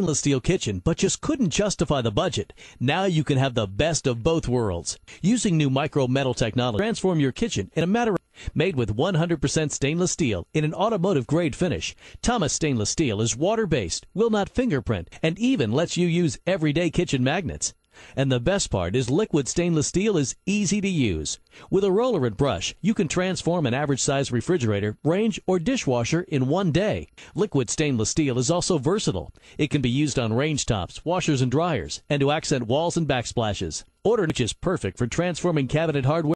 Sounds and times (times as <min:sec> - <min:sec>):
Speech: 0:00.0 - 0:36.3.